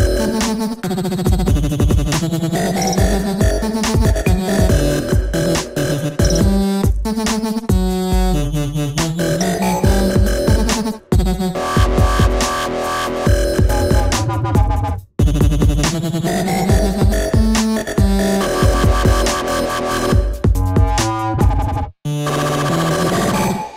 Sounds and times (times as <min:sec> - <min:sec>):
Dubstep: 0:00.0 - 0:23.7.